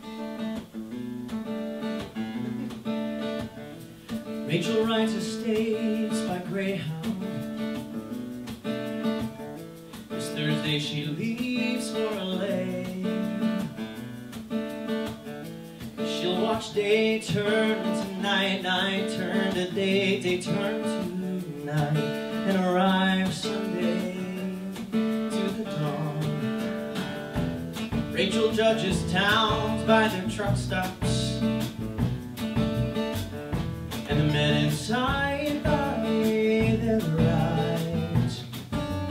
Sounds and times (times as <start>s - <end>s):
Music: 0.0s - 39.1s.